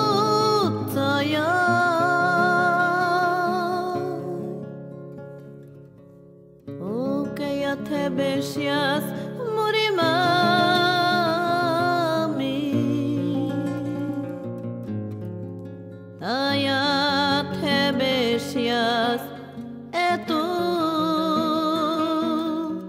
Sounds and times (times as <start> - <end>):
Music: 0.0 - 22.8.